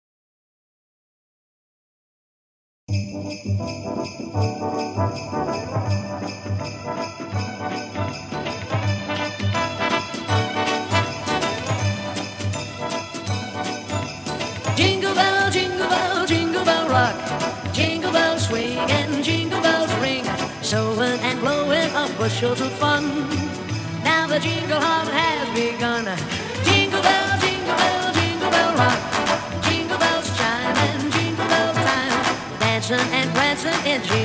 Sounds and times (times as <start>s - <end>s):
Jingle bell: 2.9s - 34.2s.